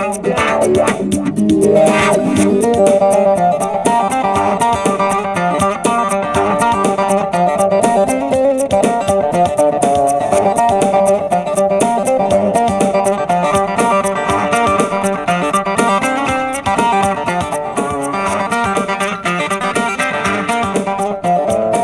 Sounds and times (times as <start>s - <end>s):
Music: 0.0s - 21.8s.